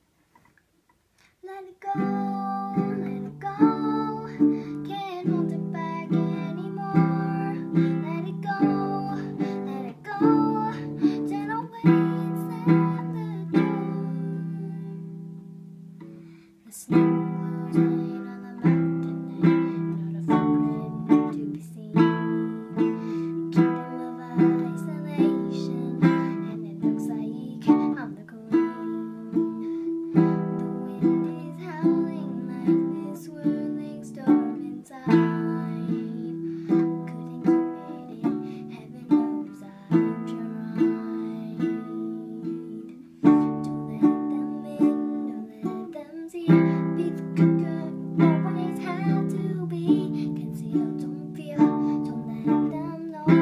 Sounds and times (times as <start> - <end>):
Acoustic guitar: 0.0 - 53.4
Strum: 1.6 - 53.4.